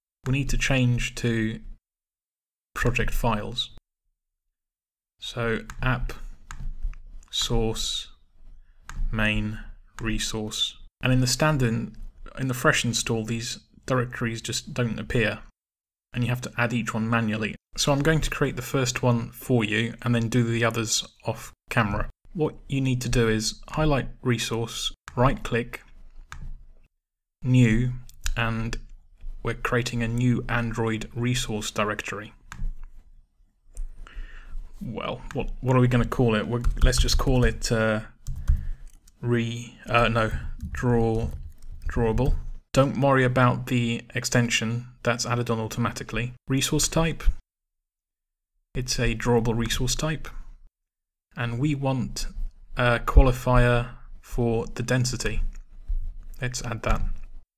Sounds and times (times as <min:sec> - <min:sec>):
Speech: 0:00.2 - 0:01.8, 0:02.8 - 0:03.8, 0:05.2 - 0:06.3, 0:07.3 - 0:08.2, 0:09.1 - 0:25.9, 0:27.4 - 0:32.4, 0:34.8 - 0:38.2, 0:39.2 - 0:47.4, 0:48.8 - 0:50.4, 0:51.3 - 0:55.6, 0:56.4 - 0:57.2.